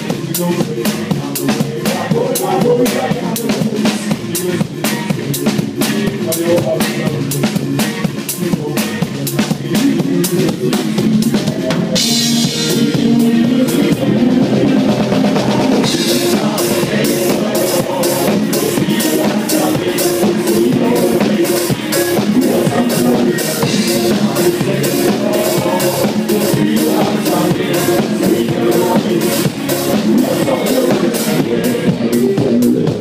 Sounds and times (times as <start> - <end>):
Music: 0.0 - 33.0.